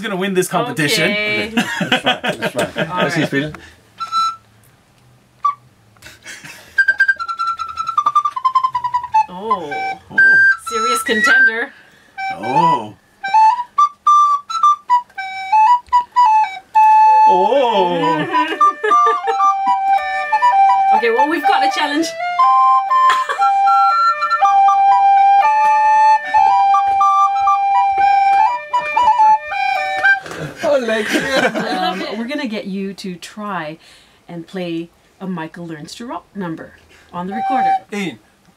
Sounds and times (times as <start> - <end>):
Music: 4.0 - 4.5, 6.8 - 30.5, 37.2 - 37.9.